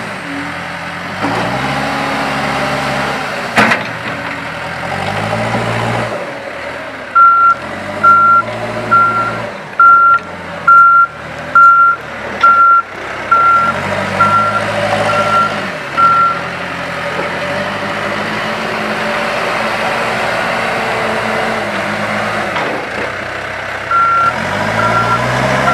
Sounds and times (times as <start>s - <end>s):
Outside, rural or natural: 0.0s - 25.7s
Vehicle: 0.0s - 25.7s.